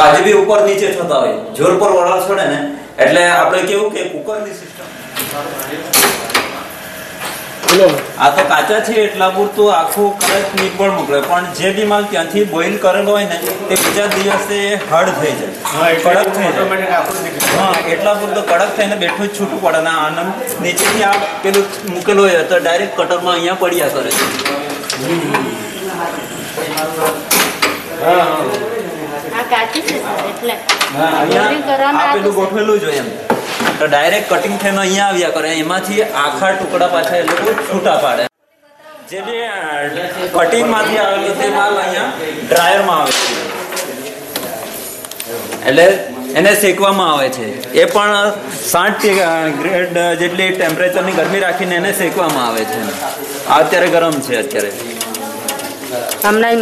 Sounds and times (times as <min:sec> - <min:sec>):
Male speech, man speaking: 0:00.0 - 0:06.6, 0:07.6 - 0:27.3, 0:27.9 - 0:30.2, 0:30.9 - 0:33.2, 0:33.8 - 0:38.3, 0:39.1 - 0:44.6, 0:45.3 - 0:55.0.